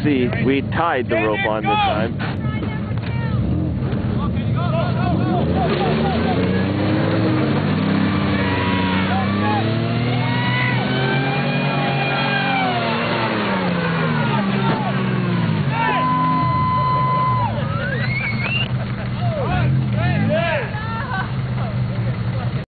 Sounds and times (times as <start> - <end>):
Car: 0.0 - 22.6.